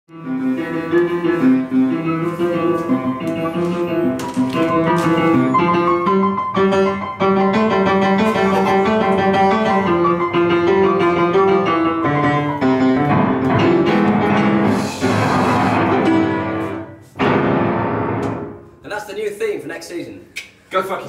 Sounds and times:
Music: 0:00.1 - 0:18.9
Inside, small room: 0:00.1 - 0:21.0.

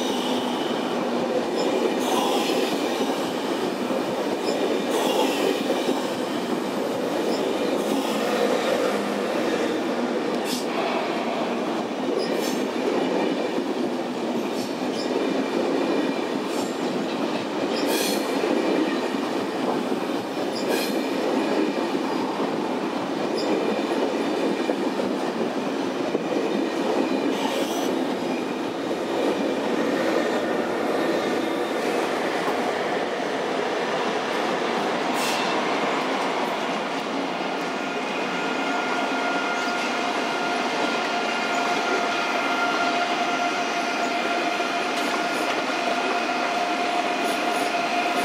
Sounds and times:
Railroad car, train wagon: 0:00.0 - 0:48.2
Train: 0:00.0 - 0:48.2.

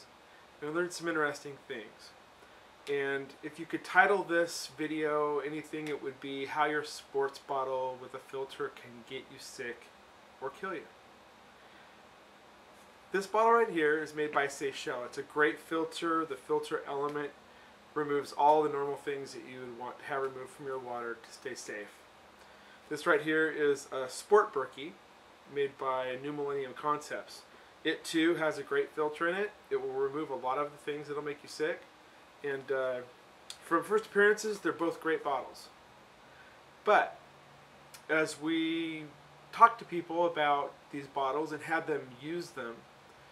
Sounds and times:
Speech: 0:00.0 - 0:02.2, 0:02.9 - 0:10.9, 0:13.1 - 0:17.4, 0:18.0 - 0:22.0, 0:22.9 - 0:35.8, 0:36.8 - 0:37.2, 0:38.0 - 0:42.8.

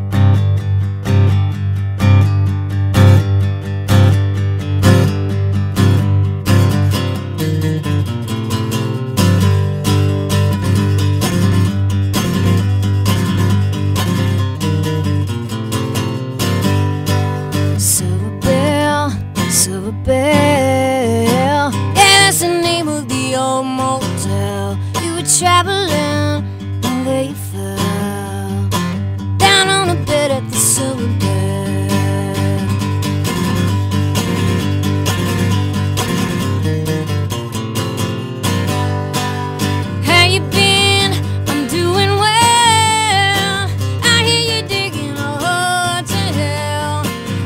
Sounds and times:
Music: 0:00.0 - 0:47.4.

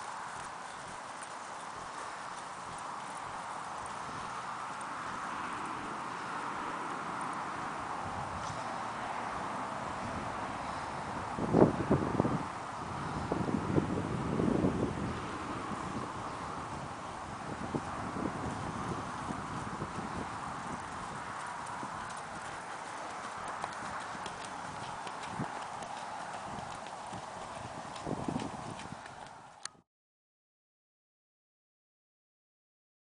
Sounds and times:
Clip-clop: 0:00.0 - 0:29.8.

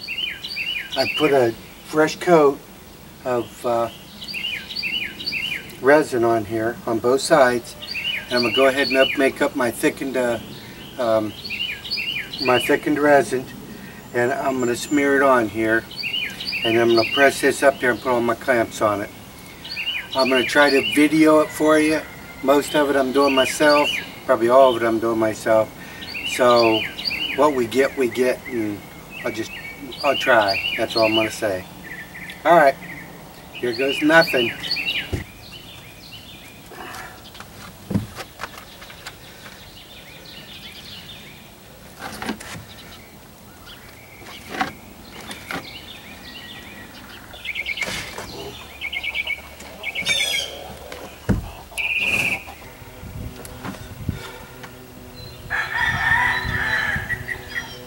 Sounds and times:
Speech: 0:03.2 - 0:03.9, 0:05.8 - 0:10.4, 0:11.0 - 0:11.3, 0:12.4 - 0:13.5, 0:14.2 - 0:15.8, 0:16.6 - 0:19.1, 0:20.2 - 0:25.7, 0:26.3 - 0:26.8, 0:27.4 - 0:31.7, 0:33.6 - 0:34.6.

